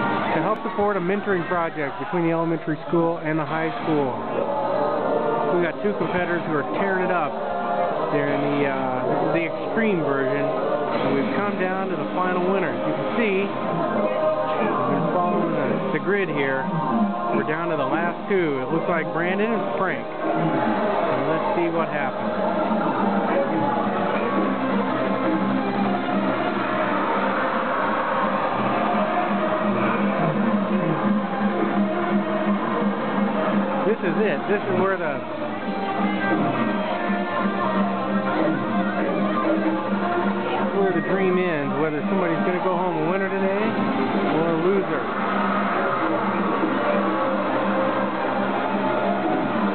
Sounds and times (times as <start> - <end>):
Speech: 0.4 - 4.3, 5.5 - 7.4, 8.1 - 16.7, 17.3 - 20.1, 21.1 - 22.2, 33.8 - 35.3, 40.5 - 45.1.